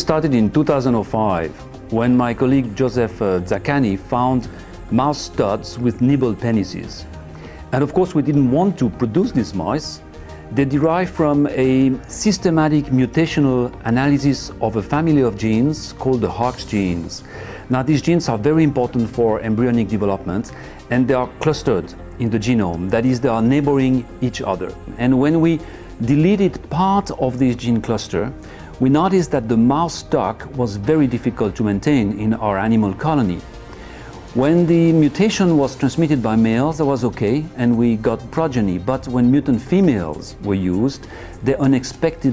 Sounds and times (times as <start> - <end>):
Speech: 0.0 - 7.1, 7.7 - 33.4, 34.3 - 42.3
Music: 0.0 - 42.3.